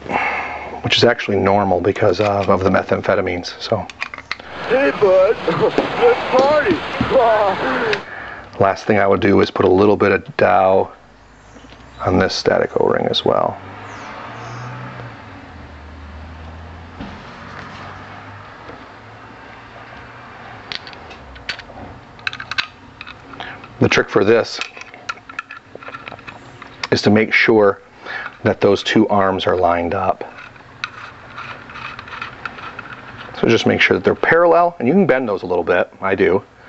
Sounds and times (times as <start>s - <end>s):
Speech: 0.8s - 3.9s, 4.7s - 8.0s, 8.6s - 11.0s, 12.0s - 13.6s, 23.8s - 24.7s, 26.9s - 27.8s, 28.4s - 30.4s, 33.4s - 36.5s.